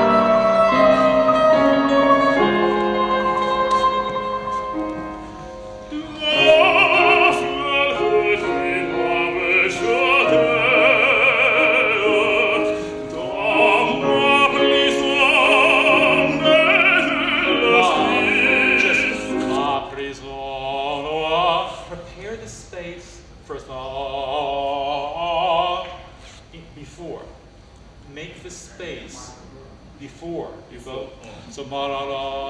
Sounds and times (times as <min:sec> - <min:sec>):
Opera: 0:00.0 - 0:26.5, 0:30.8 - 0:32.4.